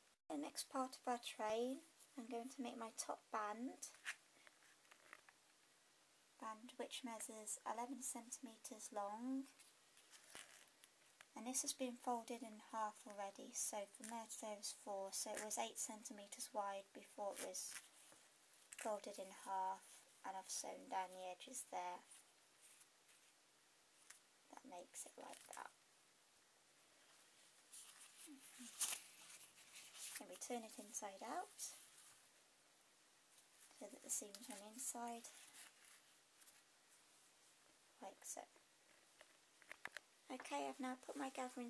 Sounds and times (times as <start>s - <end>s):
Inside, small room: 0.0s - 41.7s
Speech: 0.3s - 4.0s, 6.4s - 9.6s, 11.4s - 17.8s, 18.8s - 22.1s, 24.5s - 25.8s, 30.2s - 31.8s, 33.8s - 35.4s, 38.0s - 38.6s, 40.3s - 41.7s.